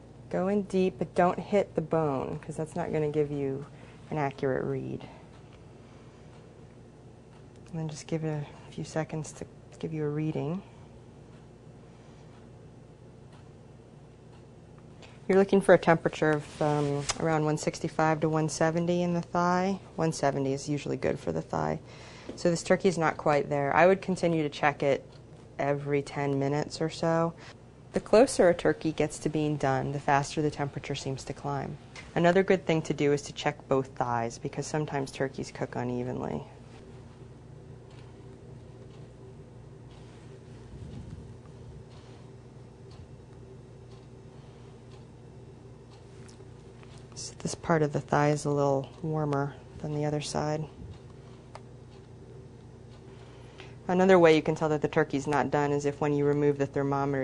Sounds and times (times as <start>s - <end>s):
Speech: 0.3s - 5.2s, 7.7s - 10.8s, 15.3s - 21.8s, 22.4s - 27.4s, 28.0s - 36.6s, 47.2s - 50.8s, 53.9s - 57.2s.